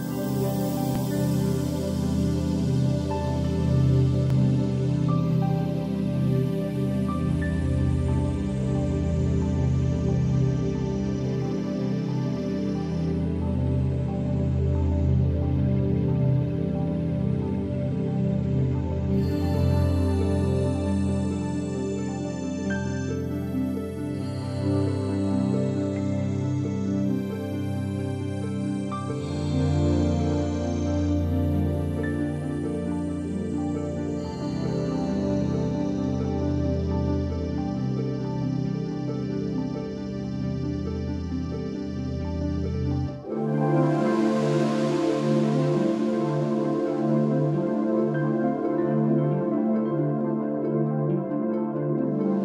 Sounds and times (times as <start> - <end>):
New-age music: 0.0 - 52.4.